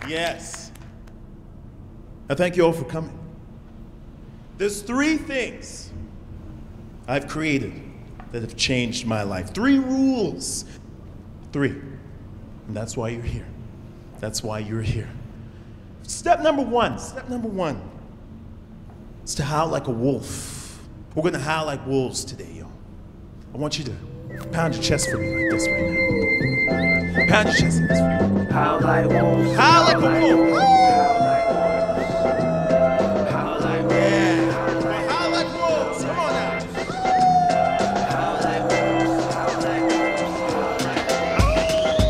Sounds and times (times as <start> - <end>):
Speech: 2.3 - 3.2, 4.6 - 6.0, 7.1 - 10.7, 12.7 - 13.6, 14.2 - 15.2, 16.1 - 18.0, 19.3 - 22.8, 23.5 - 25.7.